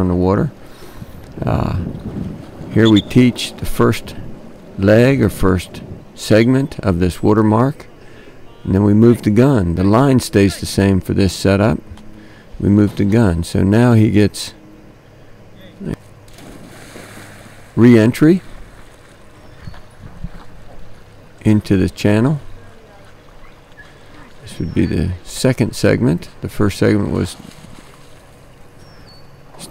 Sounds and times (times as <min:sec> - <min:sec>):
Speech: 0:00.0 - 0:00.6, 0:02.7 - 0:04.2, 0:04.8 - 0:07.9, 0:08.5 - 0:11.8, 0:12.6 - 0:14.6, 0:15.6 - 0:16.0, 0:17.8 - 0:18.5, 0:21.4 - 0:23.2, 0:24.4 - 0:27.4.